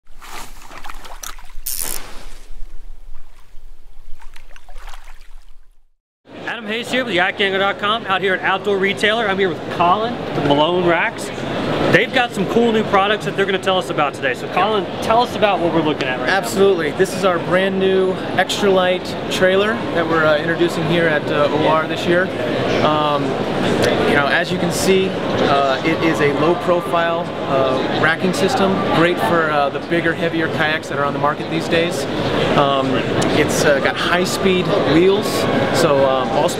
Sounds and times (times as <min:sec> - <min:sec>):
Rowboat, canoe, kayak: 0:00.1 - 0:05.8
Speech: 0:06.4 - 0:11.3, 0:11.9 - 0:36.5.